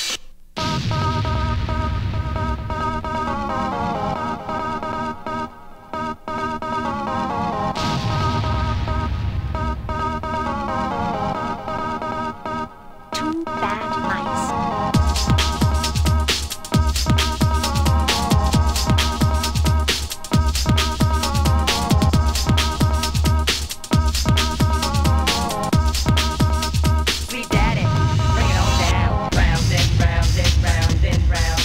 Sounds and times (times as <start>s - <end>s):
Music: 0.0s - 31.6s.